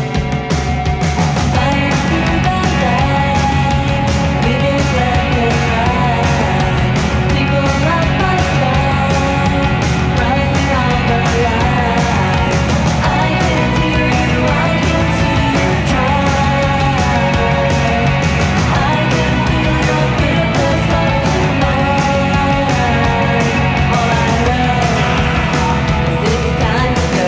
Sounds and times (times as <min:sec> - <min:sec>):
Music: 0:00.0 - 0:27.2.